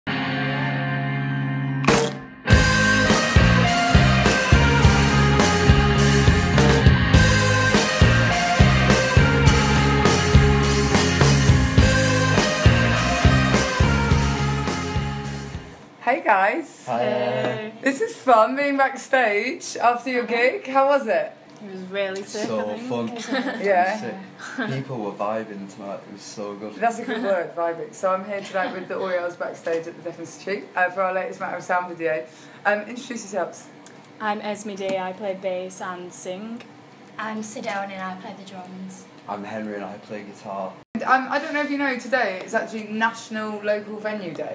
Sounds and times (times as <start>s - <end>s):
Rock music: 0.1s - 15.8s.